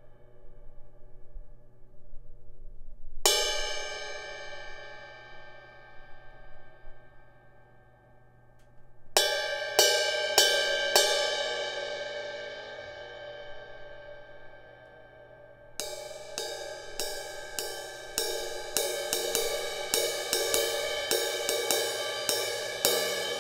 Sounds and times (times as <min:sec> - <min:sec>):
Music: 0:00.0 - 0:23.4.